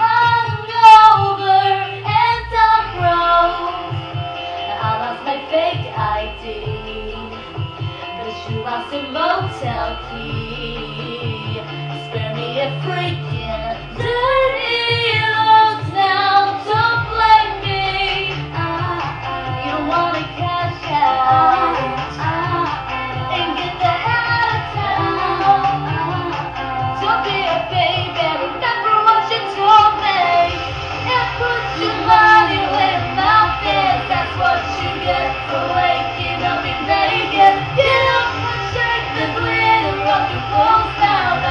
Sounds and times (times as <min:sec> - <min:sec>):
Female singing: 0:00.0 - 0:04.0, 0:04.6 - 0:07.6, 0:08.2 - 0:41.5
Music: 0:00.0 - 0:41.5.